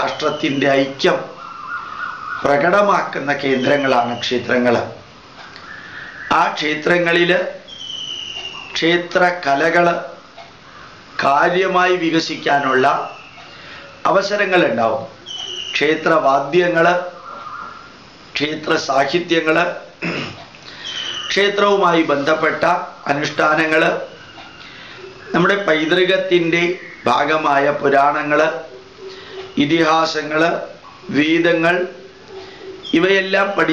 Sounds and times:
Speech: 0.0s - 1.4s, 2.4s - 5.0s, 6.3s - 7.6s, 8.8s - 10.2s, 11.2s - 13.2s, 14.0s - 15.2s, 15.8s - 17.1s, 18.4s - 19.9s, 21.3s - 24.2s, 25.3s - 28.7s, 29.6s - 32.0s, 32.8s - 33.7s.

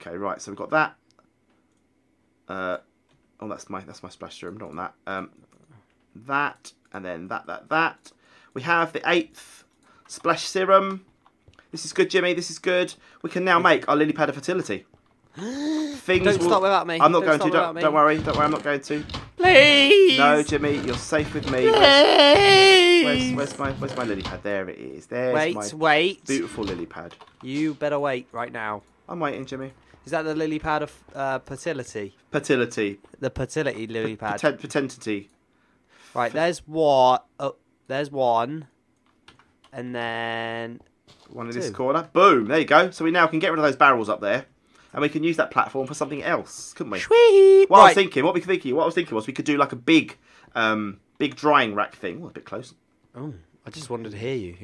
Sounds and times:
Speech: 0.0s - 1.0s, 15.8s - 35.3s, 36.2s - 38.7s, 41.4s - 54.6s
Inside, small room: 0.0s - 54.6s.

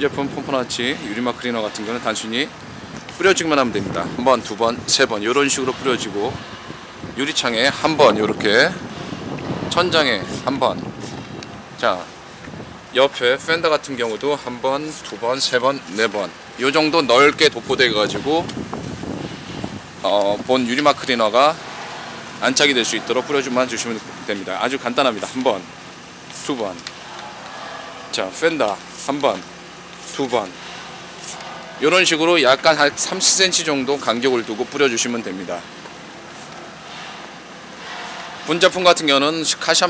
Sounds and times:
Speech: 0.0s - 2.5s, 3.2s - 6.4s, 7.2s - 8.8s, 9.7s - 10.9s, 11.8s - 12.1s, 13.0s - 18.5s, 20.0s - 21.6s, 22.4s - 25.7s, 26.3s - 26.9s, 28.1s - 30.6s, 31.2s - 35.7s, 38.4s - 39.8s.

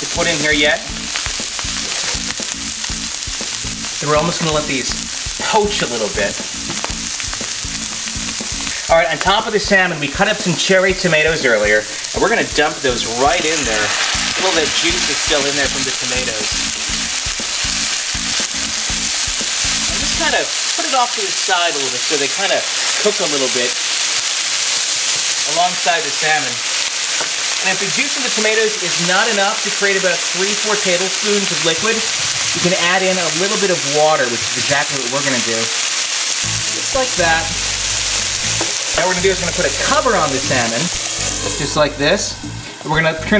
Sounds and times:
Speech: 0.0s - 0.9s, 4.0s - 6.4s, 8.9s - 16.5s, 19.9s - 23.8s, 25.4s - 26.6s, 27.6s - 35.8s, 36.8s - 37.6s, 39.0s - 40.9s, 41.6s - 43.3s
Music: 0.0s - 21.6s, 29.9s - 33.8s, 35.2s - 43.3s.

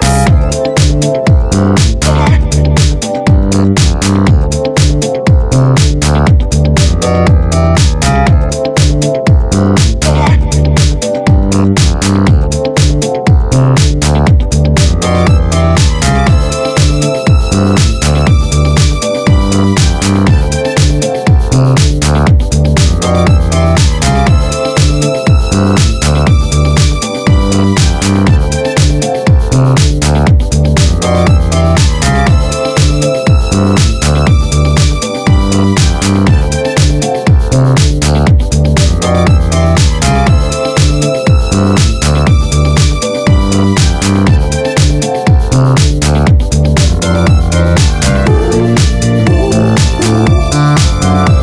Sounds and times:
Music: 0.0s - 51.4s.

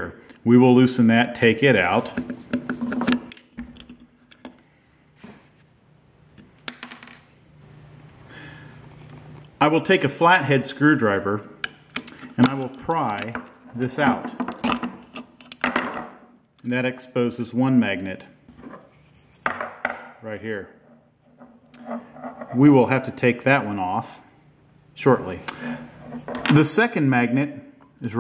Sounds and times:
Speech: 0.0s - 2.2s, 9.6s - 11.5s, 12.4s - 14.4s, 16.6s - 18.4s, 20.2s - 20.8s, 22.6s - 24.3s, 25.0s - 25.5s, 26.5s - 28.2s.

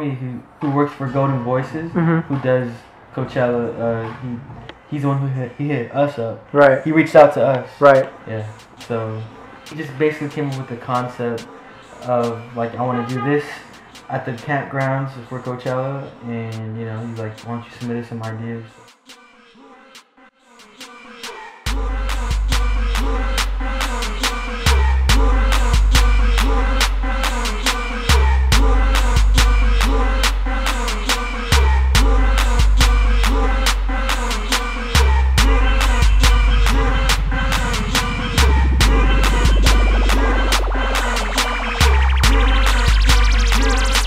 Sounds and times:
Hip hop music: 6.8s - 44.0s.

